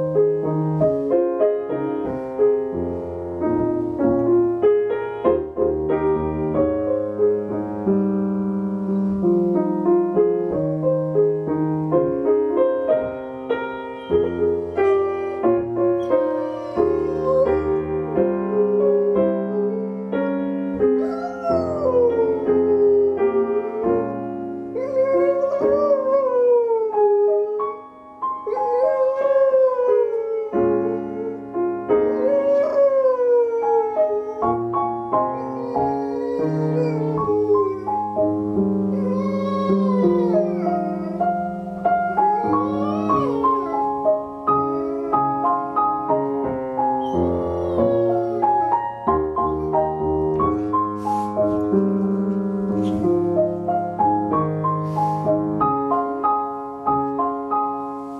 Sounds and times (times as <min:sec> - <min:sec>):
Music: 0:00.0 - 0:58.1
Howl: 0:16.0 - 0:24.2, 0:24.8 - 0:27.8, 0:28.4 - 0:31.4, 0:32.1 - 0:38.3, 0:38.9 - 0:46.2, 0:47.0 - 0:50.7.